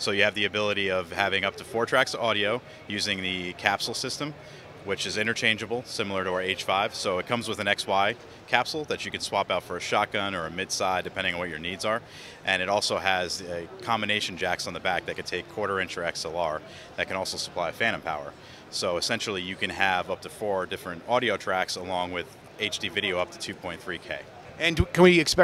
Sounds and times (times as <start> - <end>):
Speech: 0.0 - 25.4.